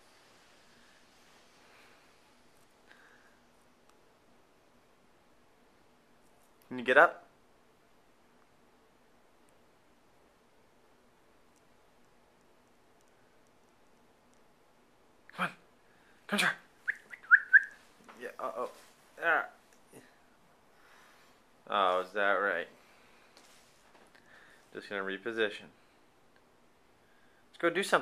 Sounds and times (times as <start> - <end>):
Speech: 6.7 - 7.3, 15.3 - 15.6, 16.3 - 16.6, 18.1 - 20.2, 21.7 - 22.8, 24.7 - 25.8, 27.6 - 28.0.